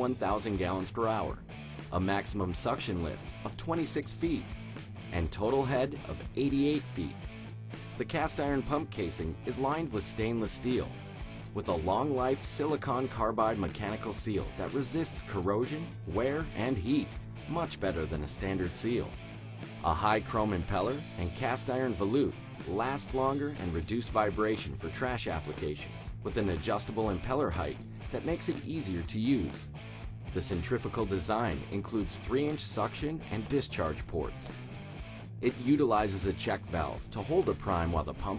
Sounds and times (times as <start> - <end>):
Speech: 0.0 - 4.5, 5.1 - 7.2, 8.0 - 10.9, 11.6 - 19.2, 19.8 - 29.7, 30.4 - 34.5, 35.4 - 38.3
Music: 0.0 - 38.3.